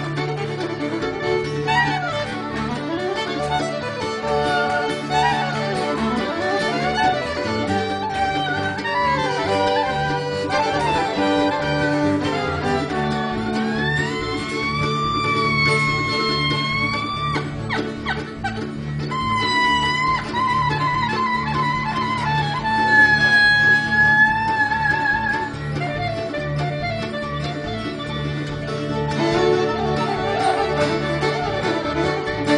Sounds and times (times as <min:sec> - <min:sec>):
Wedding music: 0:00.0 - 0:32.5.